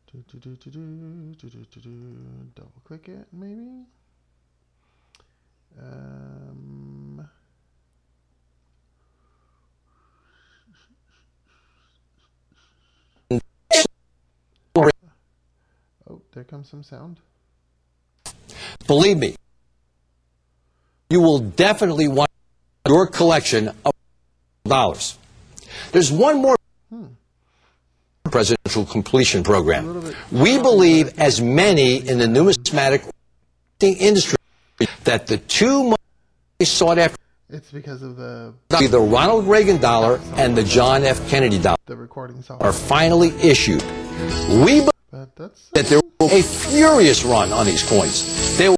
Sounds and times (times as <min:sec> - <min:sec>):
Speech: 0:01.5 - 0:04.0, 0:05.8 - 0:07.4, 0:16.0 - 0:17.3, 0:28.3 - 0:33.1, 0:36.6 - 0:43.8, 0:44.5 - 0:48.7.